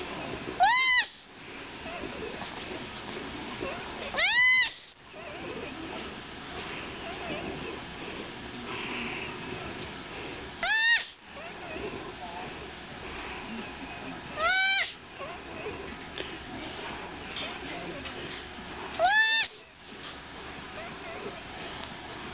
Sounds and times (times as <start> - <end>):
Domestic animals, pets: 0.0 - 22.3.